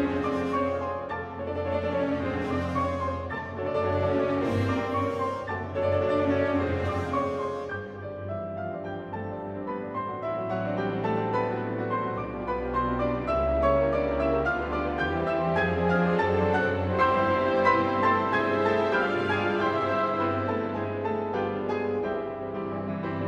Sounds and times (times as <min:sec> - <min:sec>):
Orchestra: 0:00.0 - 0:23.2.